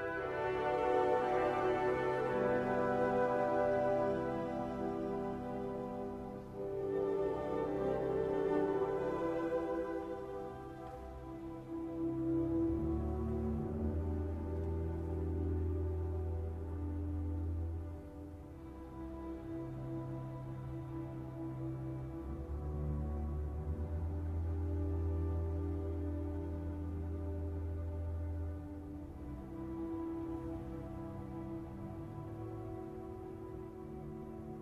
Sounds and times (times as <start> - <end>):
Music: 0.0 - 34.6.